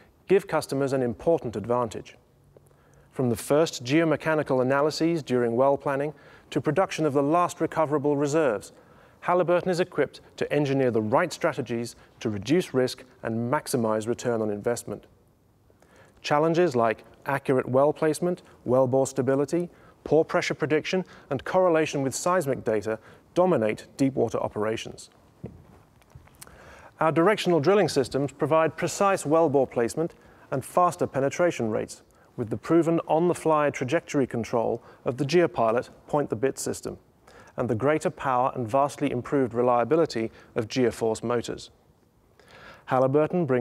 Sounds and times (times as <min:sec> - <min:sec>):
Speech: 0:00.3 - 0:02.2, 0:03.1 - 0:15.1, 0:16.2 - 0:25.1, 0:27.0 - 0:37.0, 0:37.6 - 0:41.8, 0:42.9 - 0:43.6.